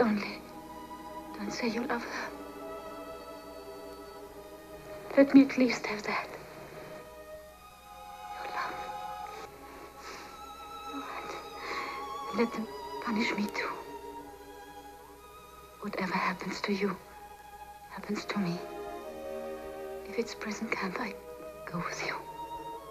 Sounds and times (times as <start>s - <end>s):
Music: 0.0s - 22.9s
Speech: 12.3s - 13.8s, 15.8s - 17.0s, 17.9s - 18.6s, 20.1s - 22.3s.